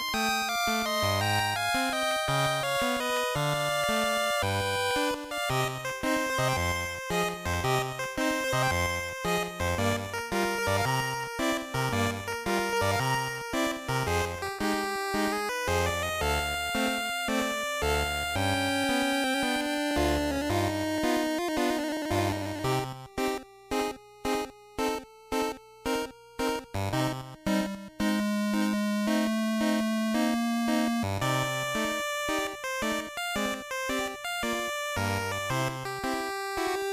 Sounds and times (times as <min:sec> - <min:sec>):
Video game music: 0:00.0 - 0:36.9.